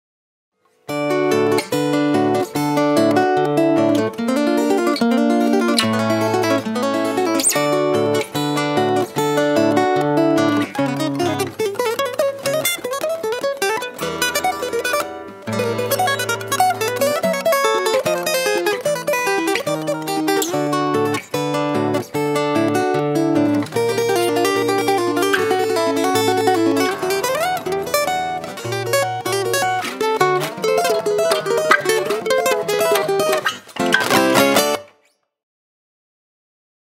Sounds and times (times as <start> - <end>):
Acoustic guitar: 0.6 - 35.2
Electric guitar: 0.8 - 35.0
Strum: 1.0 - 35.0
Bass guitar: 33.8 - 34.8.